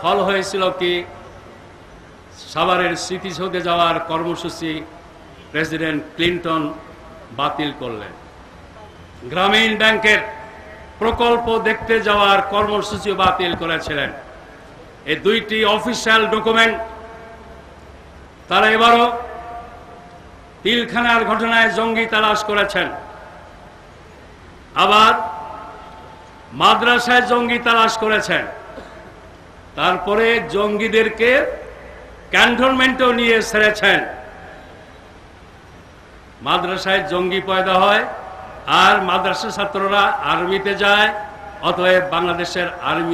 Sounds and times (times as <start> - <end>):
Male speech, man speaking: 0.0 - 1.1, 2.4 - 4.8, 5.6 - 8.1, 9.2 - 10.3, 11.0 - 14.2, 15.1 - 16.8, 18.5 - 19.3, 20.7 - 23.0, 24.8 - 25.2, 26.6 - 28.5, 29.8 - 31.6, 32.4 - 34.1, 36.4 - 38.1, 38.7 - 43.1
Narration, monologue: 0.0 - 43.1.